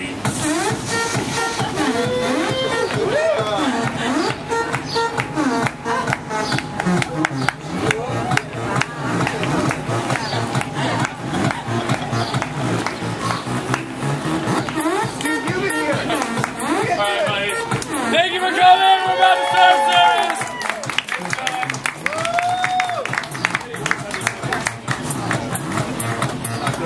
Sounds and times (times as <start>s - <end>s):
Music: 0.0s - 26.8s.